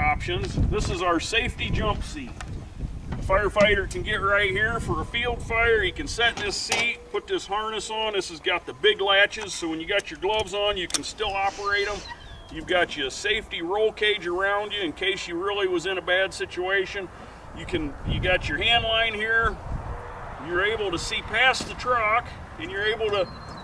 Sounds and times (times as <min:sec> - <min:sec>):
Speech: 0:00.0 - 0:02.4, 0:03.2 - 0:19.6, 0:20.4 - 0:23.4.